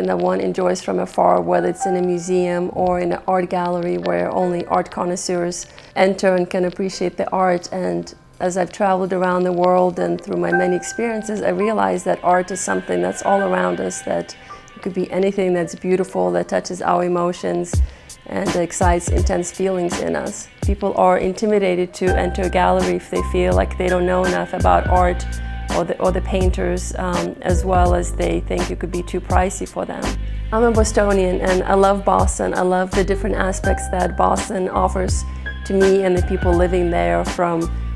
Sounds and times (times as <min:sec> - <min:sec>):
Speech: 0:00.0 - 0:37.7
Music: 0:00.0 - 0:37.9.